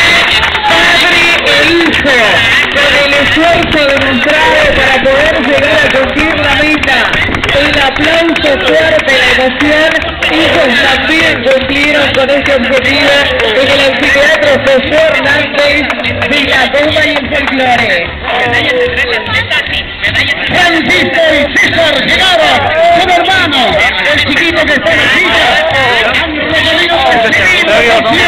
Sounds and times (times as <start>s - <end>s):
Male speech, man speaking: 0.7s - 28.2s.